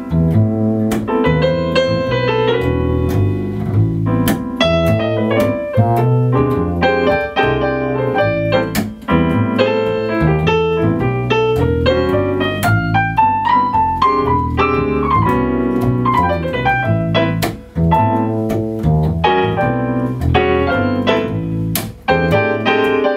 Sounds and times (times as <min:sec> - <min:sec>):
Electric piano: 0:00.0 - 0:23.1.